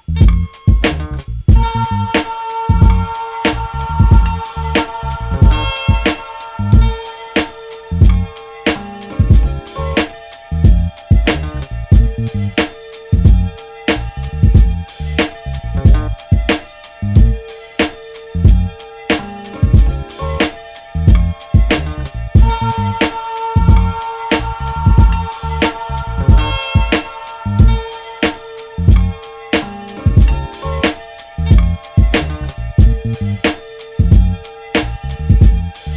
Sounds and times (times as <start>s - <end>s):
Strum: 0.0s - 35.9s.